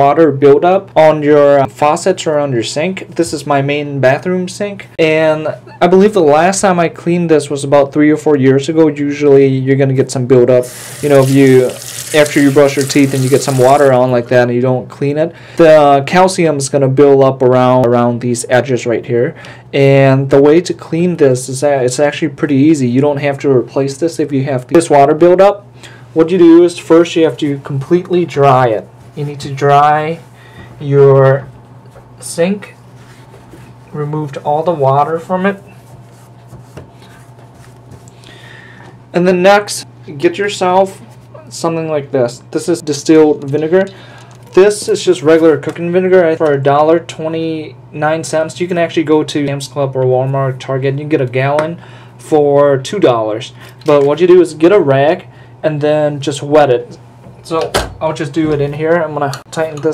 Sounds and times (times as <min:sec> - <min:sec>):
Speech: 0:00.0 - 0:25.6, 0:26.2 - 0:31.5, 0:32.2 - 0:32.8, 0:33.9 - 0:35.7, 0:39.1 - 0:59.9.